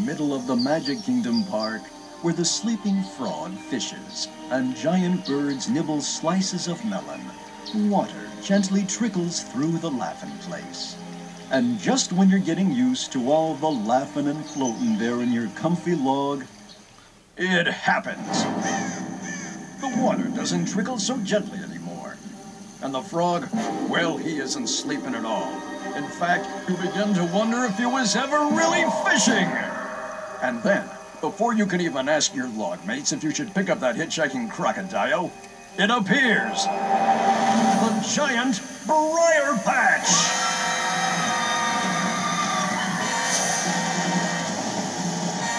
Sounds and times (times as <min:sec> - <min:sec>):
Speech: 0:00.0 - 0:16.5, 0:17.4 - 0:18.6, 0:19.8 - 0:22.2, 0:22.8 - 0:36.7, 0:37.8 - 0:40.3
Music: 0:00.0 - 0:45.5.